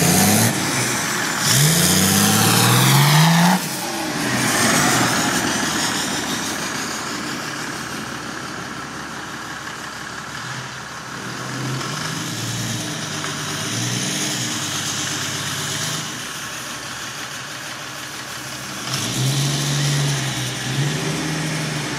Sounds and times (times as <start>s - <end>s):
Accelerating, revving, vroom: 0.0s - 6.3s, 11.2s - 16.2s, 18.7s - 21.9s
Medium engine (mid frequency): 0.0s - 21.9s
Vehicle: 0.0s - 21.9s
Idling: 4.9s - 11.6s, 16.2s - 18.8s.